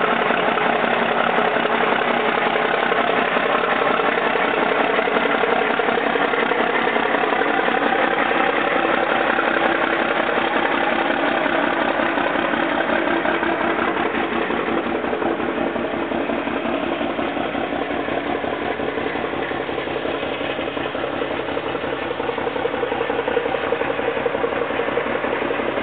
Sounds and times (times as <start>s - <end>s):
Truck: 0.0s - 25.8s.